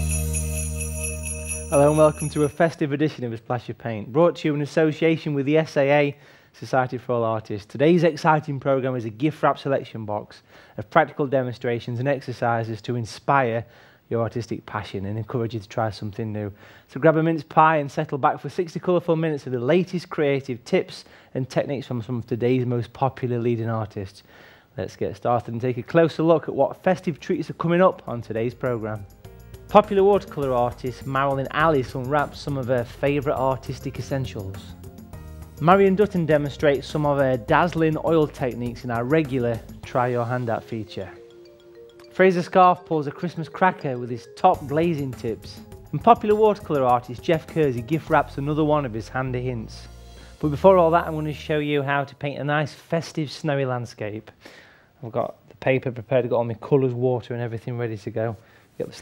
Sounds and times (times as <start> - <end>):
Music: 0.0 - 2.8, 27.0 - 52.2
Speech: 1.7 - 29.0, 29.7 - 34.7, 35.6 - 41.2, 42.2 - 54.4, 55.0 - 59.0.